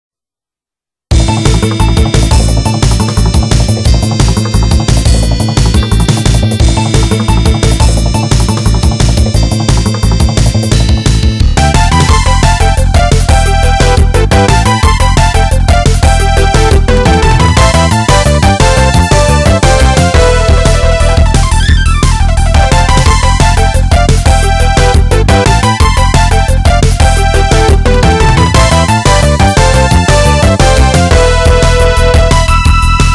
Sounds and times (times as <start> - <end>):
Background music: 1.1 - 33.1
Soundtrack music: 1.1 - 33.1
Video game music: 1.1 - 33.1.